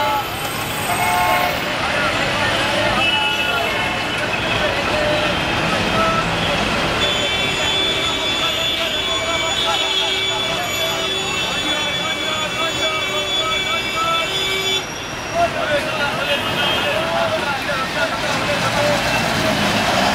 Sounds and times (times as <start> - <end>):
Bus: 0.0 - 20.1
Speech: 1.4 - 14.6, 15.3 - 20.1.